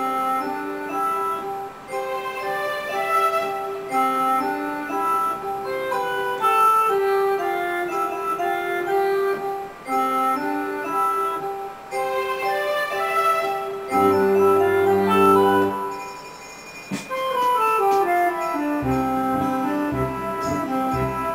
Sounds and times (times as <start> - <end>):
Tender music: 0.0 - 21.3.